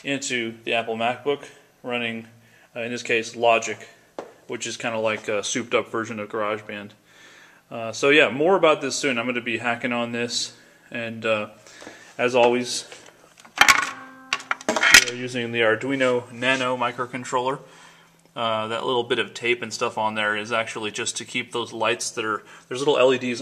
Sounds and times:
Speech: 0:00.0 - 0:07.0, 0:07.7 - 0:11.6, 0:12.2 - 0:13.0, 0:15.0 - 0:17.7, 0:18.4 - 0:23.4.

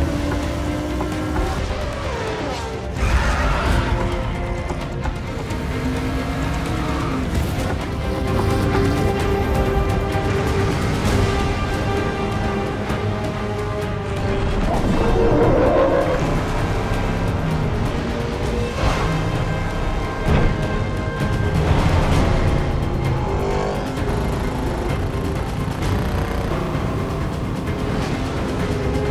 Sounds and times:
Car: 0:00.0 - 0:29.1
Music: 0:00.0 - 0:29.1.

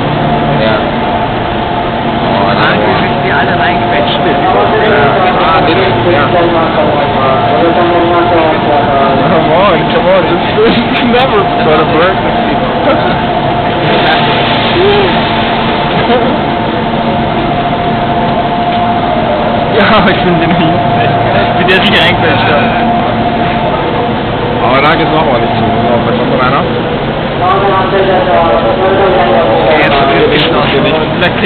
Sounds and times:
Vehicle: 0:00.0 - 0:31.4
Speech: 0:00.5 - 0:00.9, 0:02.3 - 0:13.2, 0:24.6 - 0:26.7, 0:27.4 - 0:31.4.

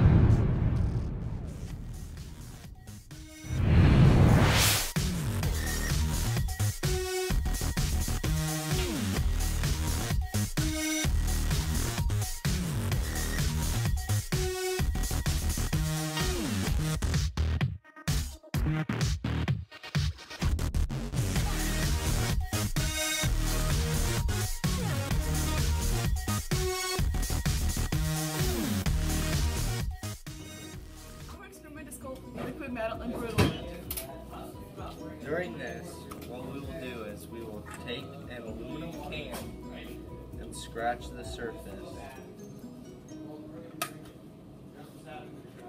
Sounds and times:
Music: 0:00.0 - 0:45.6.

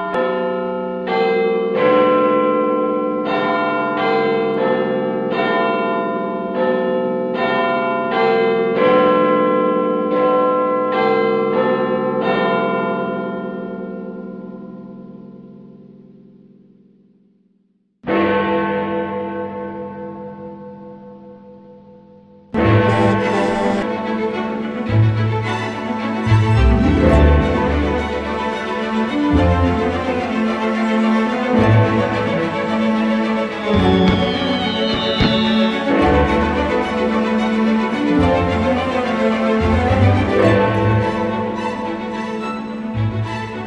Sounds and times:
Music: 0:19.0 - 0:43.6
Sound effect: 0:22.6 - 0:23.9, 0:33.6 - 0:37.1.

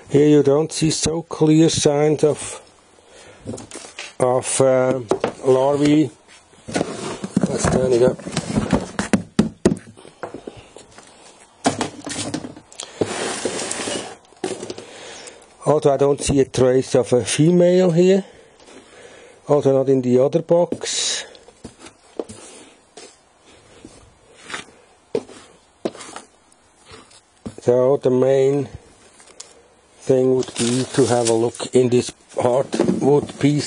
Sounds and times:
Speech: 0:00.1 - 0:02.6, 0:04.2 - 0:06.2, 0:07.4 - 0:08.2, 0:15.6 - 0:18.3, 0:19.5 - 0:21.4, 0:27.6 - 0:28.8, 0:30.0 - 0:33.6.

